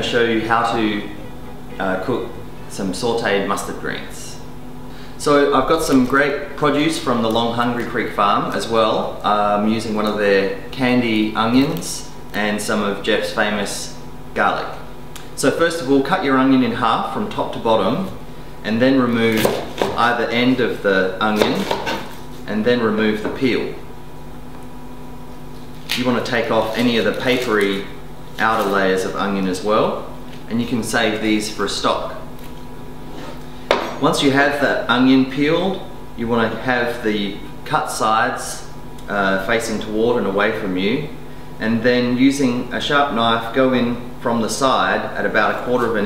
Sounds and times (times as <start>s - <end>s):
Speech: 0.0s - 1.2s, 1.8s - 4.5s, 5.2s - 21.8s, 22.4s - 23.8s, 25.9s - 32.3s, 34.0s - 46.0s.